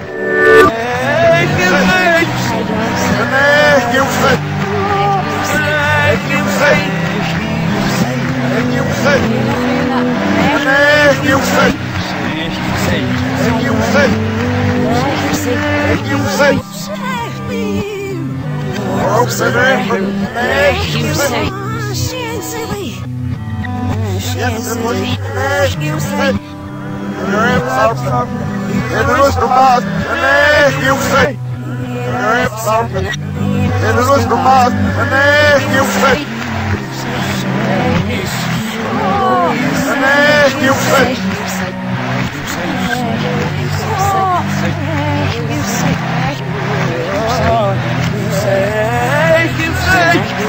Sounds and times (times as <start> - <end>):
Music: 0.0 - 50.4
Male speech, man speaking: 0.6 - 18.0, 18.8 - 23.0, 24.0 - 26.5, 27.2 - 41.7, 42.4 - 50.4.